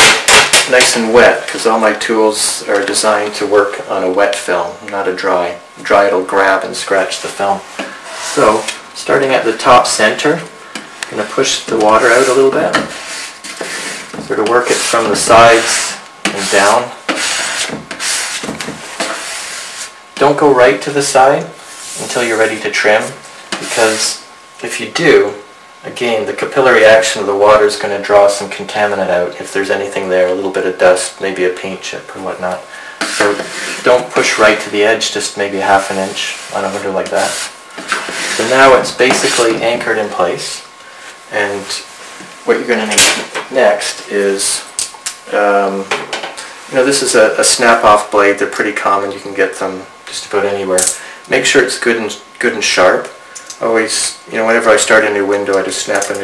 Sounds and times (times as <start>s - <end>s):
Rub: 12.1s - 18.4s, 19.0s - 19.9s.